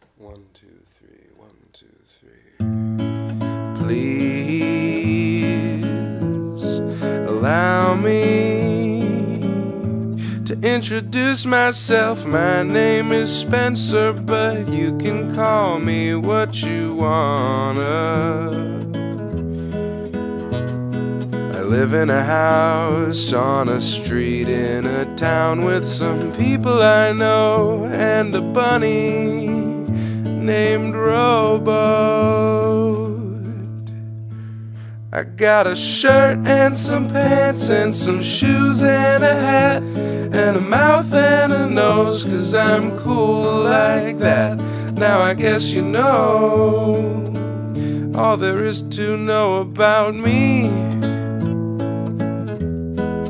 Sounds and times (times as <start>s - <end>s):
Music: 2.6s - 53.2s.